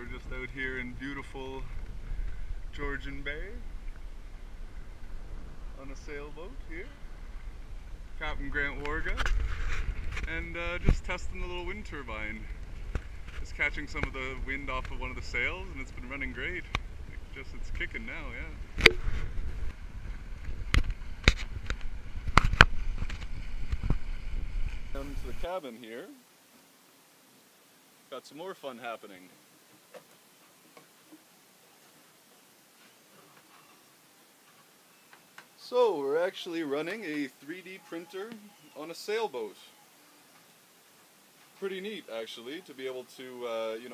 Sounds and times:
Wind noise (microphone): 7.2 - 25.4.

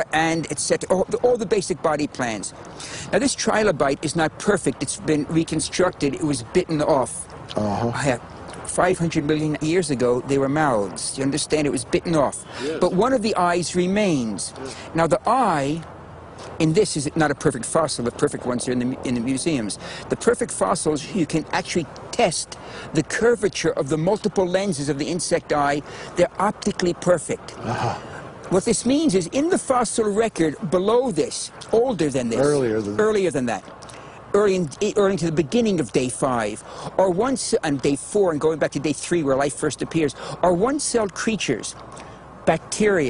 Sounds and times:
Speech: 3.2 - 15.8, 28.6 - 33.6.

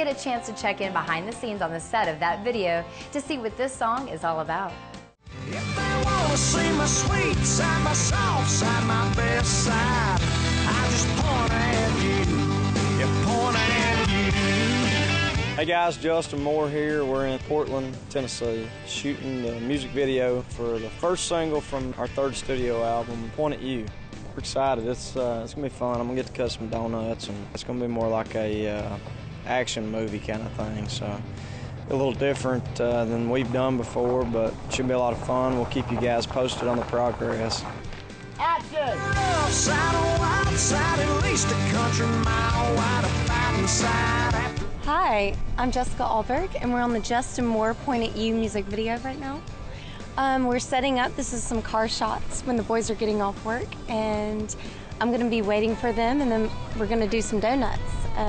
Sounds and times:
Music: 0.0 - 58.2
Speech: 15.6 - 31.2, 31.9 - 37.7, 50.2 - 58.2.

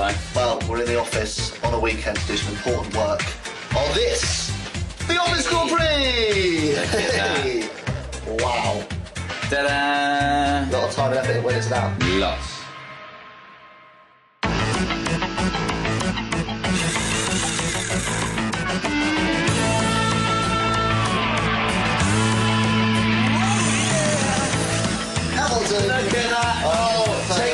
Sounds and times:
Music: 0.0 - 27.5
Speech: 9.5 - 12.6.

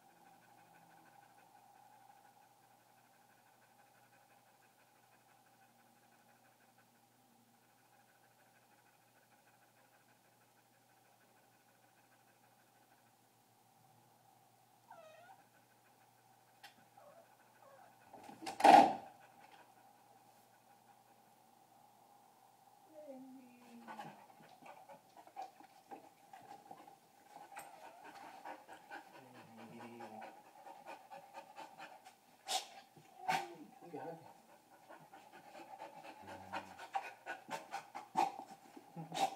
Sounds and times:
Dog: 0.0 - 13.1, 14.9 - 21.3, 23.0 - 39.3
Pant: 0.0 - 13.2, 15.4 - 21.2, 23.6 - 39.3.

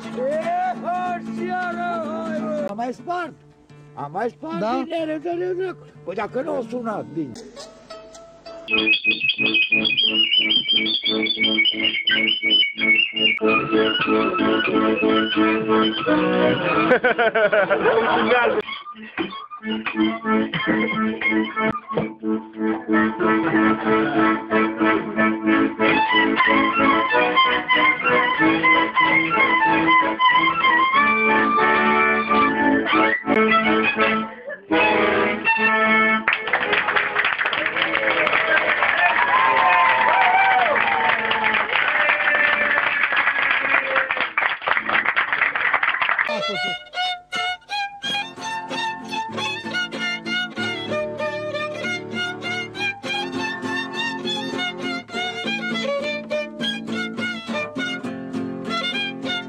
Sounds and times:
Accordion: 0.0 - 37.6, 46.3 - 59.4
Violin, fiddle: 13.3 - 17.2, 18.2 - 37.2, 46.3 - 59.4.

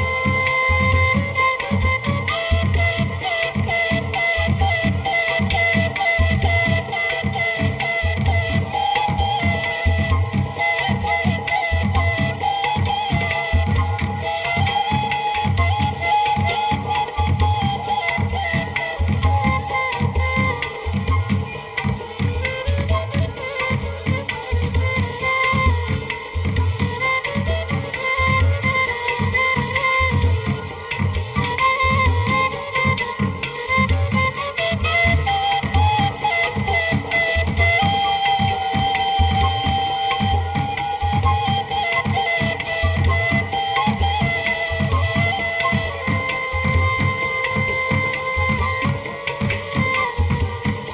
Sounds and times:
Middle Eastern music: 0.0 - 50.9.

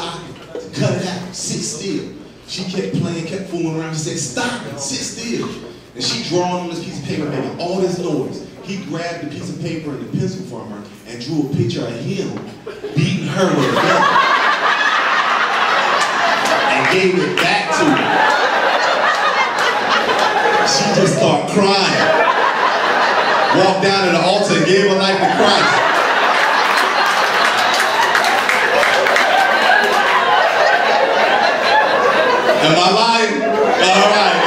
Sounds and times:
Speech: 0.0 - 14.2, 16.7 - 18.2, 20.6 - 22.2, 23.5 - 25.9, 32.6 - 34.4.

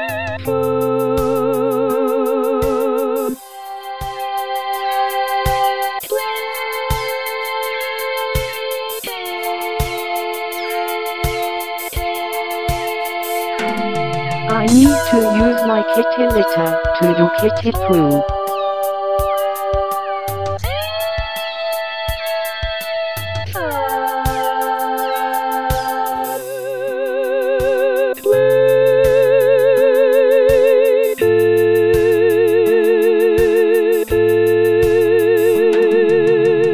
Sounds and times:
Music: 0.0 - 36.7
Speech: 13.6 - 18.2.

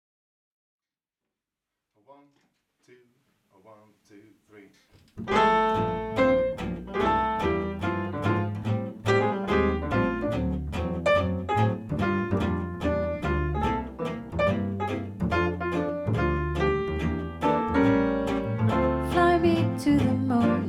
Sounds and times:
Speech: 2.0 - 4.8, 19.1 - 20.6
Guitar: 5.1 - 20.6
Double bass: 5.2 - 20.6
Jazz: 5.2 - 20.6
Piano: 5.2 - 20.6.

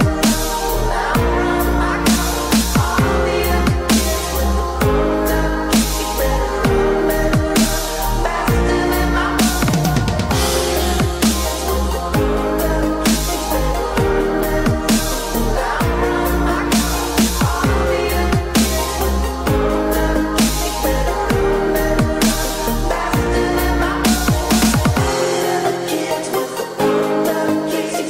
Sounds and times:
Dubstep: 0.0 - 28.0.

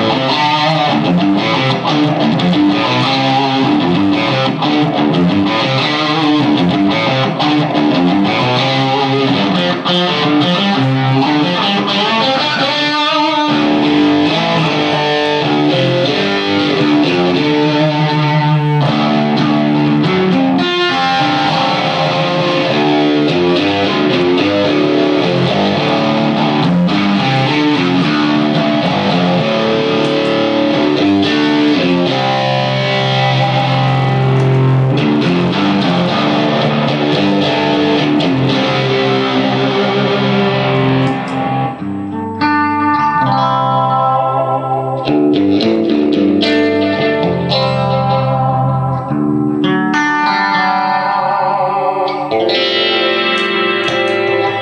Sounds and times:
Music: 0.0 - 54.6.

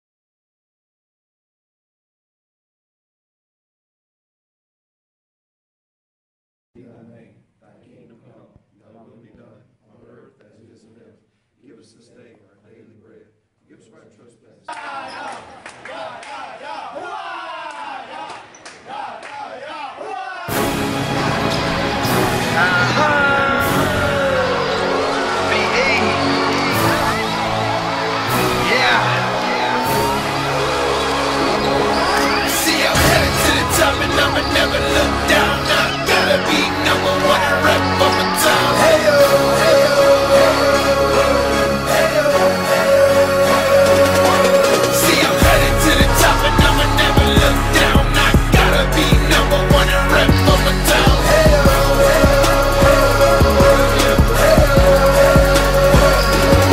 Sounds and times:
Speech: 6.8 - 20.5.

